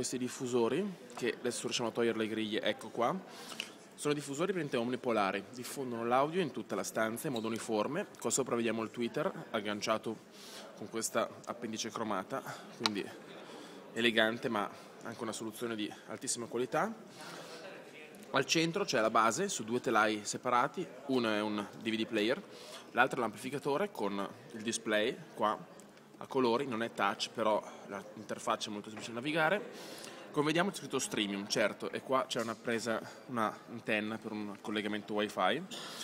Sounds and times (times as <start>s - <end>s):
Speech: 0.0s - 3.3s, 4.0s - 35.7s.